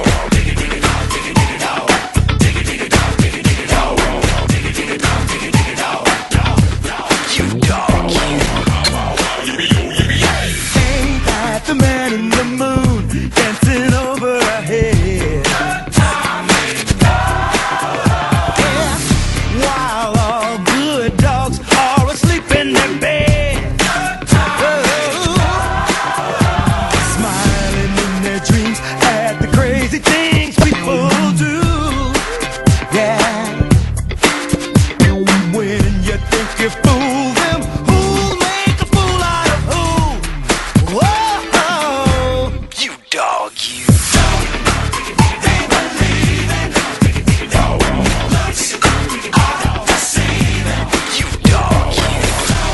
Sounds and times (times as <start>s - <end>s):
Music: 0.0s - 52.7s.